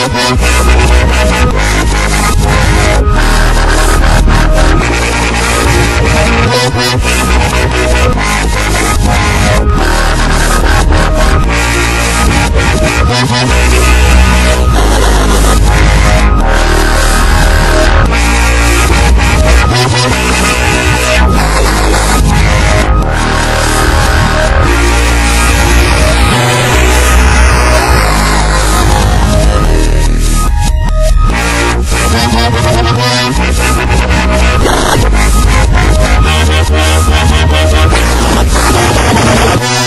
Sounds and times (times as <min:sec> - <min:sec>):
Dubstep: 0:00.0 - 0:39.8.